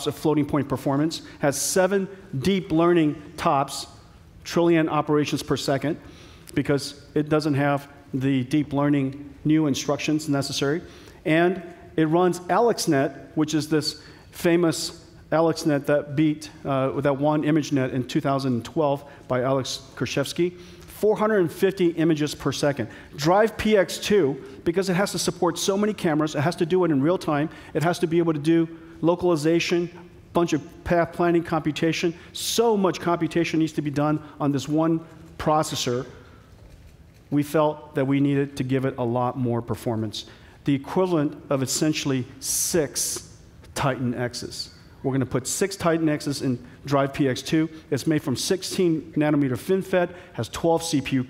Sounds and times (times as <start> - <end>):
Speech: 0.0 - 36.2, 37.3 - 51.3.